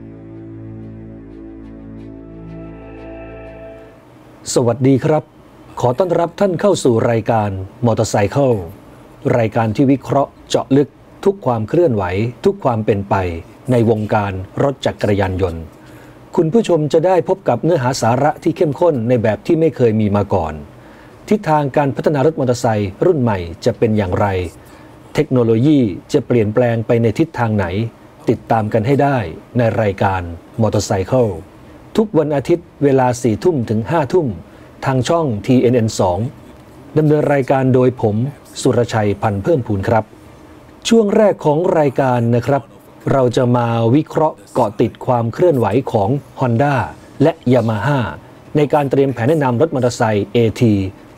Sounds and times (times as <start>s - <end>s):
Speech: 4.4s - 15.7s, 16.3s - 20.7s, 21.3s - 40.1s, 40.8s - 51.0s.